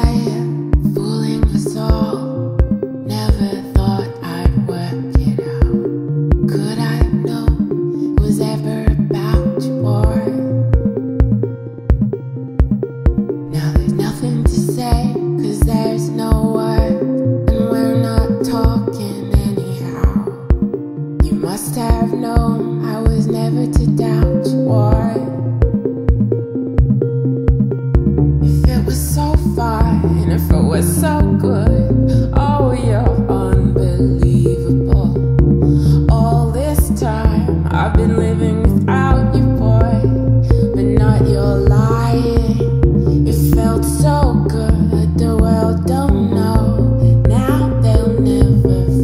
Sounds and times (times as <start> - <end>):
Drum machine: 0.0 - 49.0.